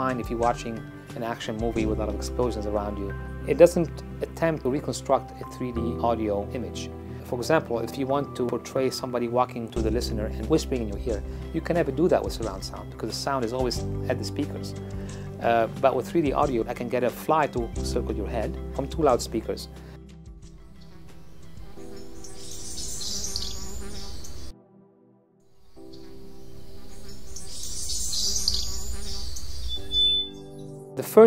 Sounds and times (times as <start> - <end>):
Chirp, tweet: 21.9 - 24.5, 26.7 - 30.8.